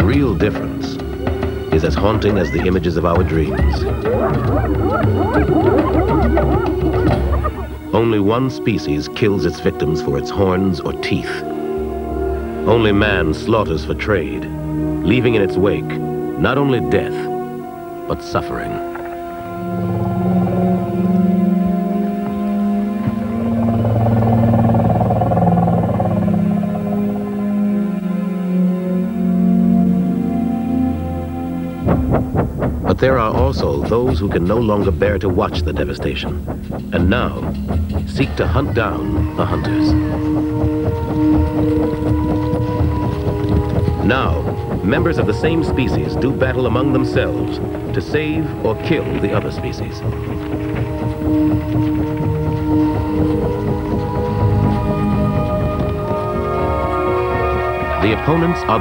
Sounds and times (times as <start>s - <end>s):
Speech: 0.0s - 1.0s, 1.7s - 6.7s, 7.9s - 11.4s, 12.7s - 17.3s, 18.1s - 18.8s, 32.9s - 40.2s, 44.0s - 50.1s, 58.0s - 58.8s
Music: 0.0s - 58.8s.